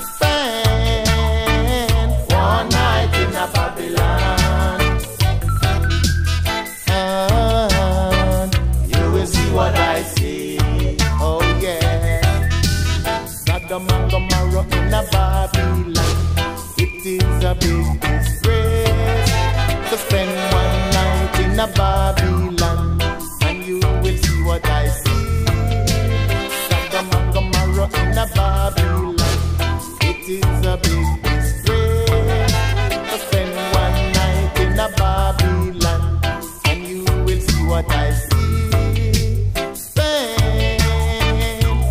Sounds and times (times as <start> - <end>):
Music: 0.0 - 41.9.